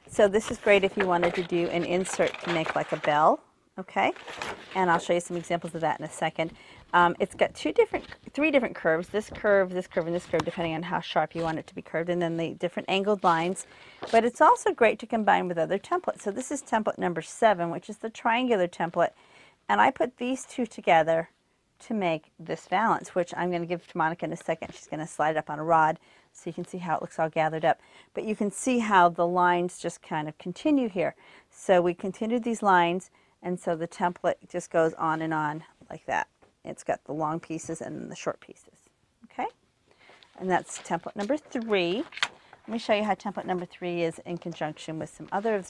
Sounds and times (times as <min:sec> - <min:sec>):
Speech: 0:00.1 - 0:39.6, 0:40.4 - 0:42.1, 0:42.7 - 0:45.6.